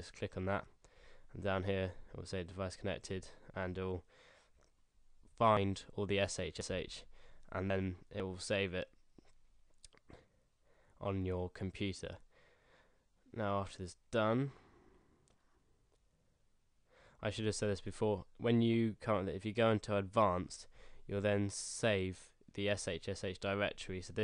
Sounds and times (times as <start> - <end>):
Speech: 0.0 - 4.1, 5.4 - 9.0, 11.0 - 12.2, 13.3 - 14.6, 17.2 - 24.2.